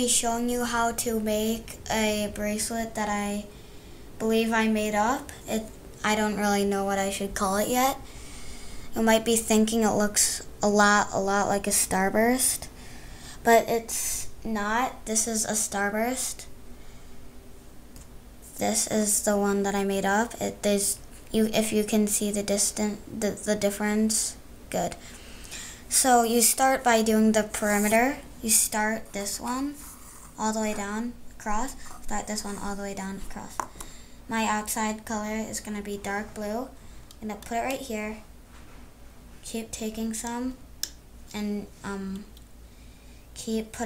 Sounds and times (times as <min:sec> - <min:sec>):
Speech: 0:00.0 - 0:03.5, 0:04.2 - 0:08.0, 0:08.9 - 0:12.7, 0:13.4 - 0:16.5, 0:18.5 - 0:25.0, 0:25.9 - 0:33.6, 0:34.3 - 0:38.3, 0:39.4 - 0:40.6, 0:41.3 - 0:42.3, 0:43.4 - 0:43.8.